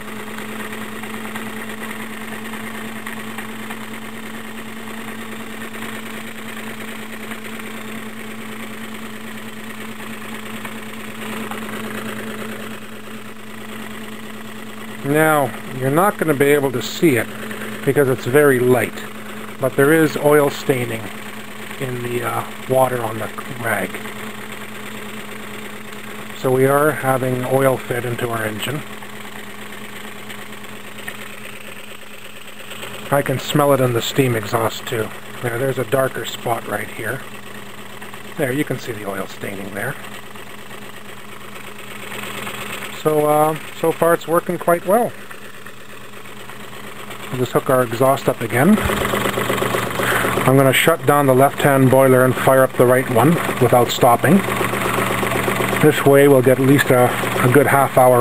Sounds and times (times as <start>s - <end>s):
Engine: 0.0s - 58.2s
Sewing machine: 0.0s - 58.2s
Speech: 15.0s - 21.1s, 21.8s - 24.0s, 26.4s - 28.8s, 33.1s - 37.2s, 38.4s - 40.0s, 42.9s - 45.2s, 47.3s - 48.9s, 50.4s - 54.4s, 55.8s - 58.2s.